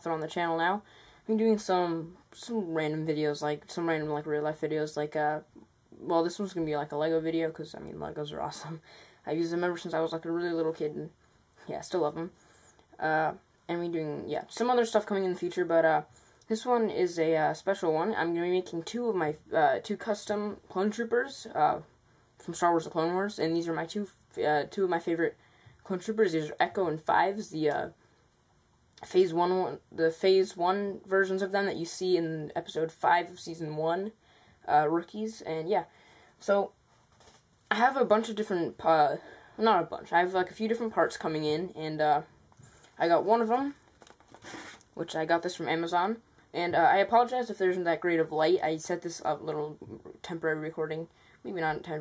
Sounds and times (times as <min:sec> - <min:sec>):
Speech: 0:00.0 - 0:12.4, 0:13.0 - 0:28.0, 0:29.0 - 0:36.8, 0:37.7 - 0:42.3, 0:43.0 - 0:43.8, 0:45.0 - 0:52.0.